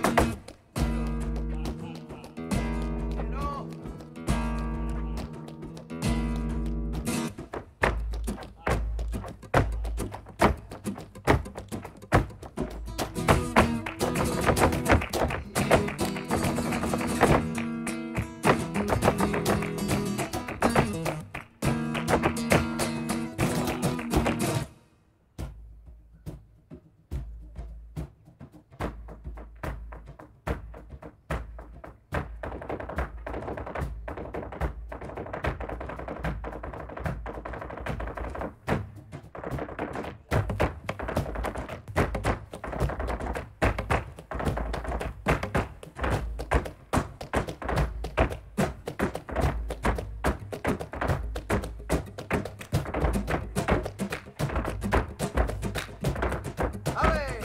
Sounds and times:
Flamenco: 0.0s - 57.4s
Speech: 1.5s - 2.4s, 3.2s - 3.7s, 8.6s - 9.0s, 9.6s - 10.0s, 57.0s - 57.4s.

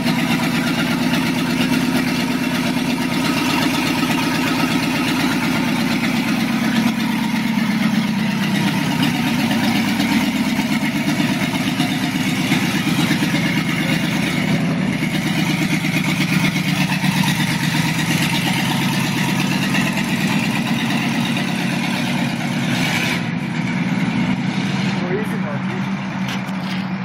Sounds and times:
Car: 0.0s - 27.0s.

